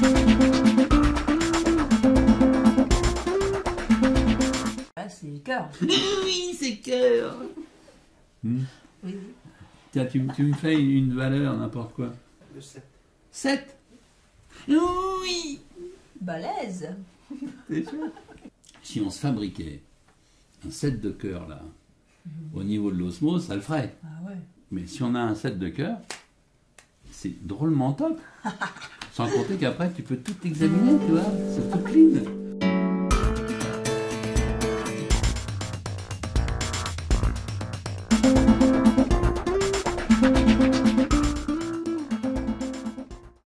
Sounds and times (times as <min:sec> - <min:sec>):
Music: 0:00.0 - 0:04.9, 0:30.6 - 0:43.4.